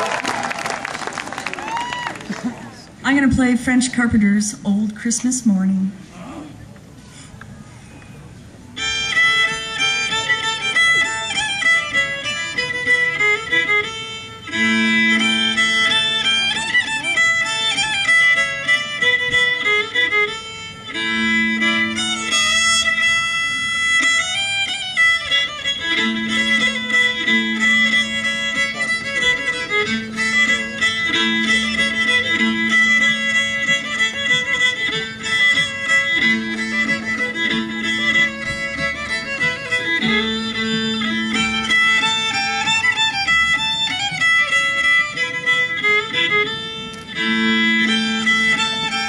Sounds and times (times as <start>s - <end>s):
Violin, fiddle: 7.4s - 49.0s.